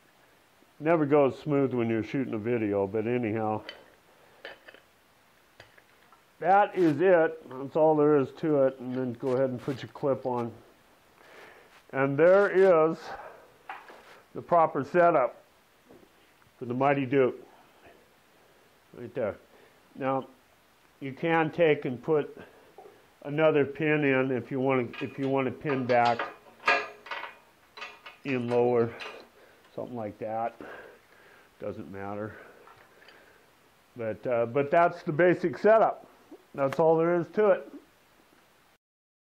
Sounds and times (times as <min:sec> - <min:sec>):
Speech: 0:00.8 - 0:03.7, 0:06.4 - 0:10.7, 0:11.9 - 0:13.3, 0:14.4 - 0:15.4, 0:16.6 - 0:17.4, 0:19.0 - 0:19.4, 0:20.0 - 0:20.3, 0:21.0 - 0:22.5, 0:23.2 - 0:26.3, 0:28.3 - 0:29.1, 0:29.7 - 0:30.8, 0:31.6 - 0:32.5, 0:34.0 - 0:37.8.